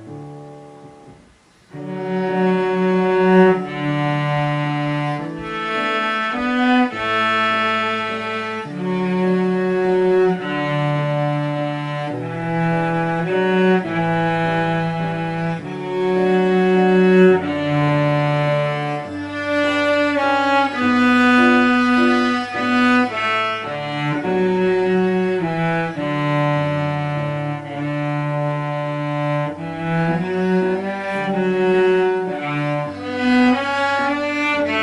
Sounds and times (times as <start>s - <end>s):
Cello: 0.0s - 34.8s.